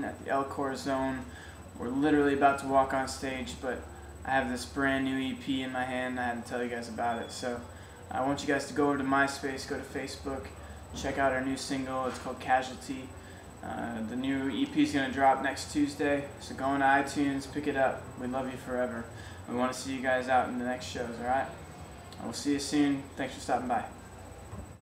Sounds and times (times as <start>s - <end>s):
Speech: 0.0s - 21.6s, 22.2s - 24.0s.